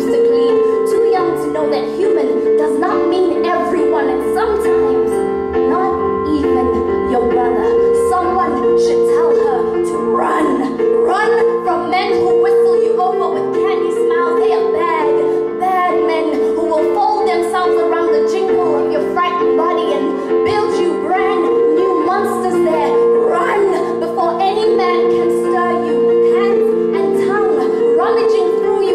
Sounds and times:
Inside, large room or hall: 0.0s - 28.9s
Music: 0.0s - 28.9s
Speech: 0.0s - 28.9s.

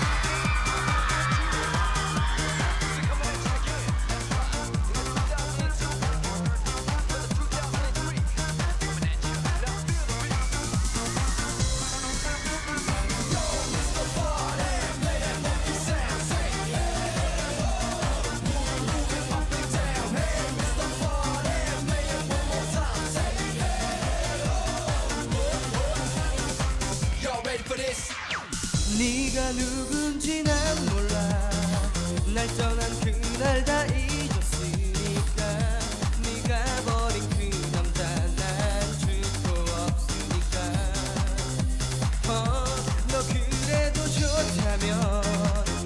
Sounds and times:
Music: 0.0s - 45.8s.

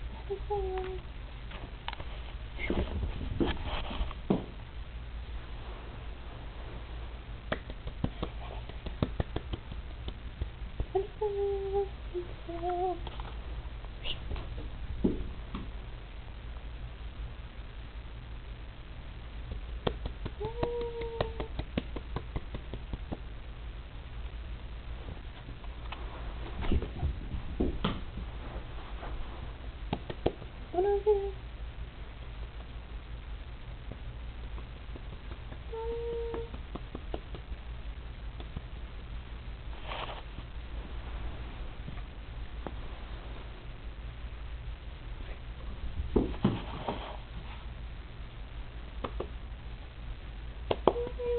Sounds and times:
Speech: 0.2s - 1.0s, 30.7s - 31.4s, 50.9s - 51.3s.

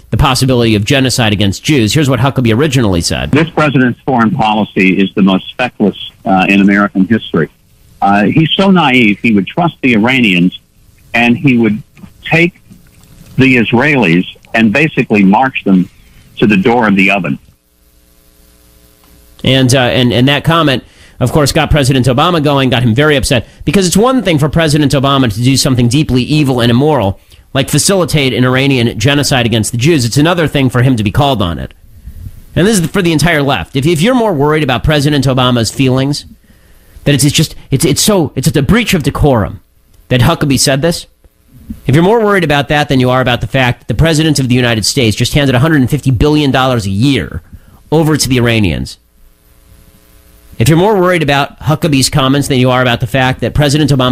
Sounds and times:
Speech: 0.1s - 12.6s, 13.4s - 17.5s, 19.4s - 31.8s, 32.6s - 36.4s, 37.0s - 49.0s, 50.6s - 54.1s.

